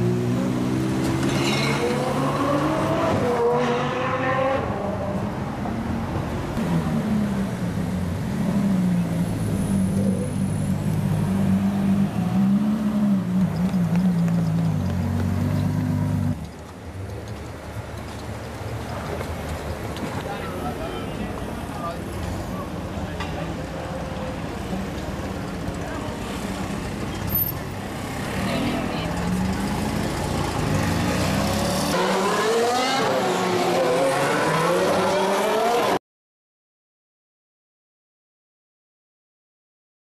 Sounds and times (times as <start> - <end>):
Race car, auto racing: 0.0 - 18.2, 18.9 - 36.0.